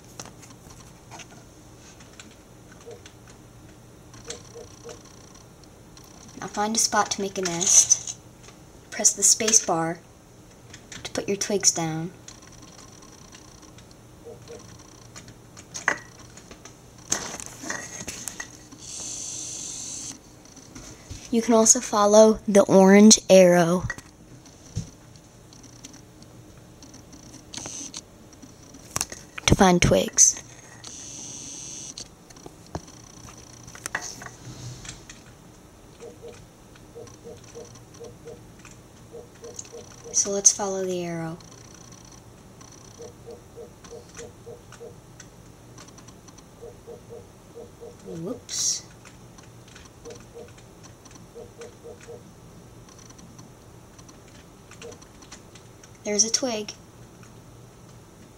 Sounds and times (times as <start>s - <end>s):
Speech: 6.4s - 8.0s, 9.0s - 10.0s, 11.0s - 12.2s, 21.3s - 23.9s, 29.5s - 30.4s, 40.1s - 41.4s, 48.1s - 48.9s, 56.0s - 56.8s.